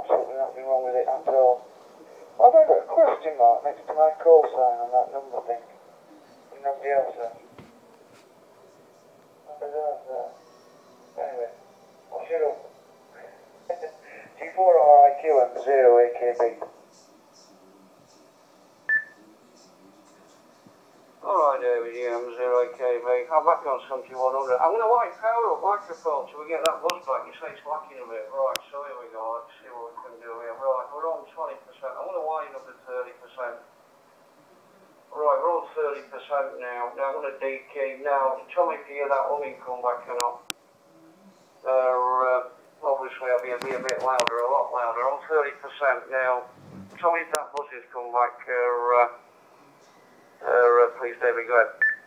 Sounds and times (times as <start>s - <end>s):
Speech: 0.0s - 10.5s, 11.2s - 13.3s, 14.1s - 33.7s, 34.6s - 51.8s.